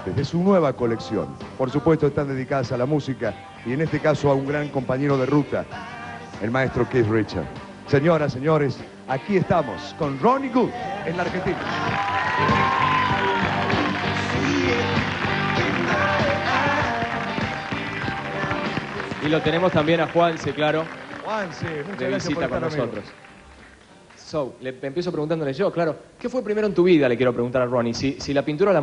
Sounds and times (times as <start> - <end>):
Music: 0.0 - 28.8.